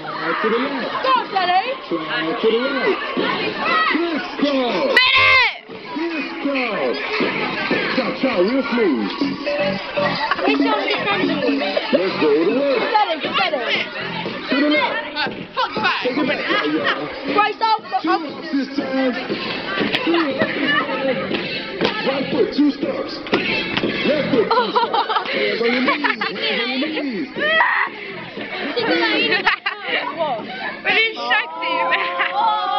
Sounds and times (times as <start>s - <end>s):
Music: 0.0s - 32.7s
Outside, urban or manmade: 0.0s - 32.7s.